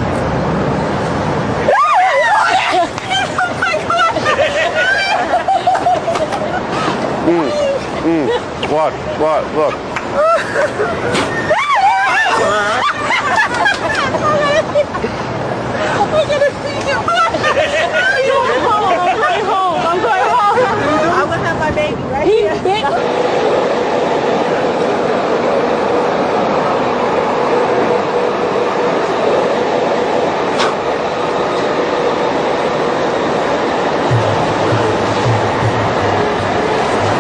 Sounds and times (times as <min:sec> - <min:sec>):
Hubbub, speech noise, speech babble: 0:14.2 - 0:23.1.